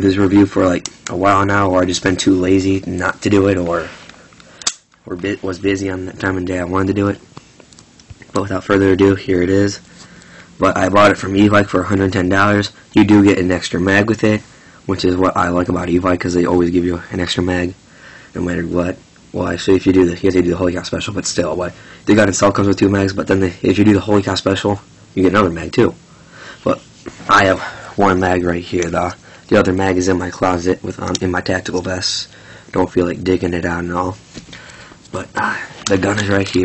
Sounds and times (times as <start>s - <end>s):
Speech: 0.0s - 4.0s, 5.0s - 7.2s, 8.3s - 9.9s, 10.6s - 26.0s, 26.6s - 34.2s, 35.1s - 36.6s.